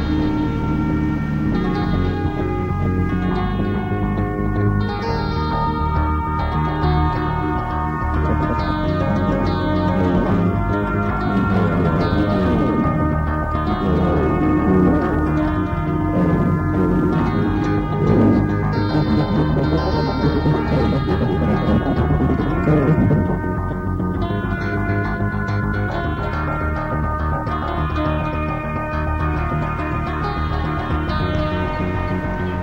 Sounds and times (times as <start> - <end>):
Music: 0.0 - 32.6.